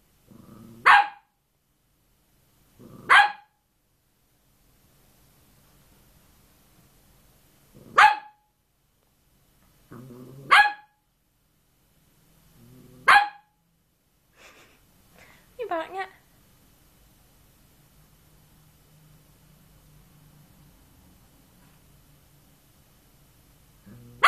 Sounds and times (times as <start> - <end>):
Bark: 0.8 - 1.3, 3.0 - 3.6, 8.0 - 8.5, 10.5 - 11.0, 13.0 - 13.6
Speech: 15.6 - 16.2.